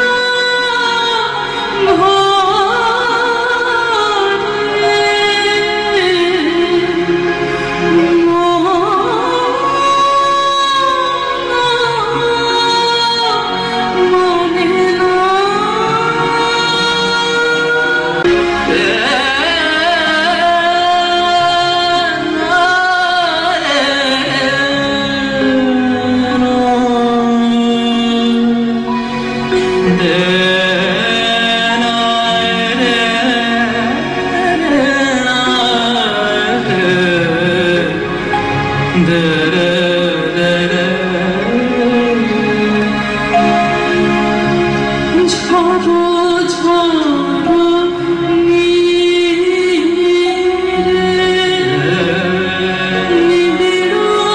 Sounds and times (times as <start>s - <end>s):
Inside, large room or hall: 0.0s - 54.3s
Music: 0.0s - 54.3s.